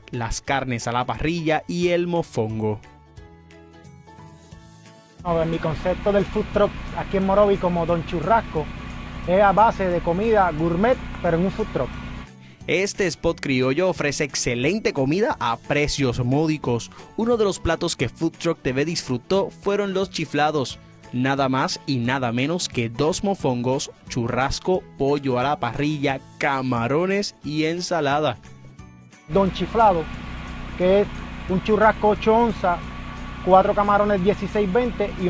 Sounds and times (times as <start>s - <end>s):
Music: 0.0s - 35.2s
Speech: 0.1s - 2.8s, 5.3s - 8.7s, 9.3s - 11.9s, 12.7s - 28.4s, 29.3s - 30.1s, 30.8s - 32.8s, 33.5s - 35.2s.